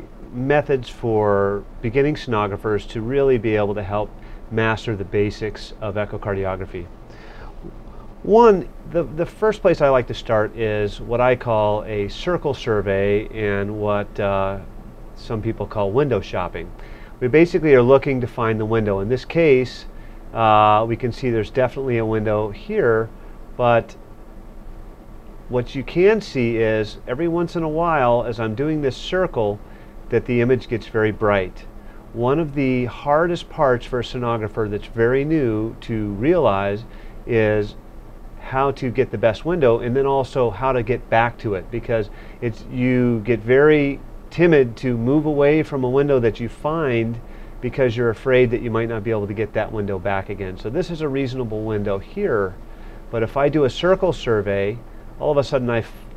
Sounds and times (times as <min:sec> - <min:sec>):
Speech: 0:00.0 - 0:06.9, 0:08.2 - 0:24.0, 0:25.5 - 0:37.8, 0:38.4 - 0:56.1.